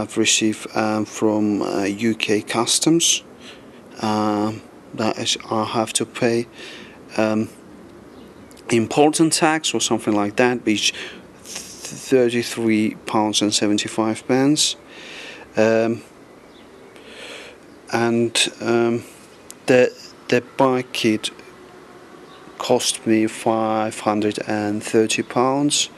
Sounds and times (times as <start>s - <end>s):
Speech: 0.0s - 3.3s, 4.0s - 7.6s, 8.6s - 14.8s, 15.5s - 16.1s, 17.9s - 21.5s, 22.6s - 25.9s.